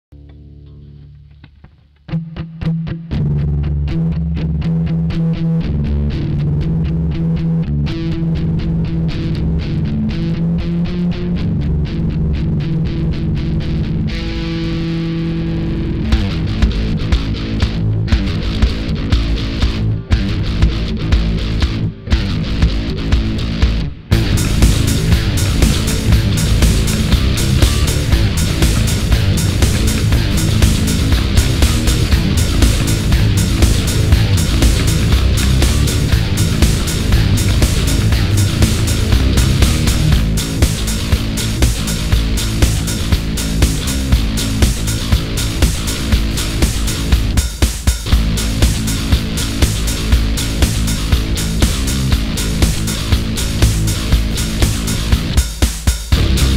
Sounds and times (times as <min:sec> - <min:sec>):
Music: 0:00.0 - 0:56.5.